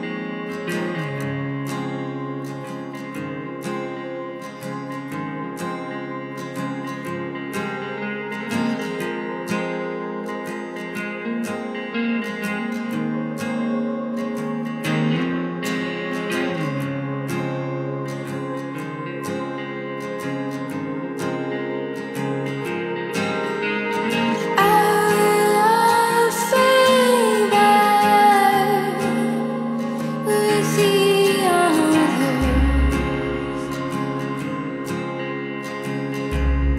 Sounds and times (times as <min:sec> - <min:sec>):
Music: 0:00.0 - 0:36.7.